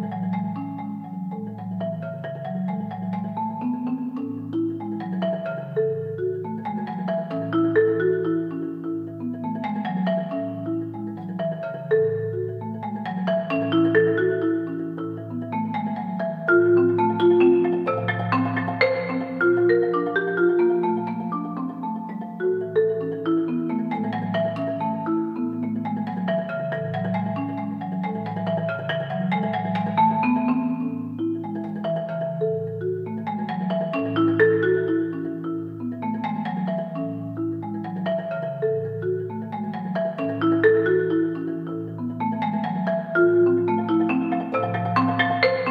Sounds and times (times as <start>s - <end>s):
Marimba, xylophone: 0.0s - 45.7s.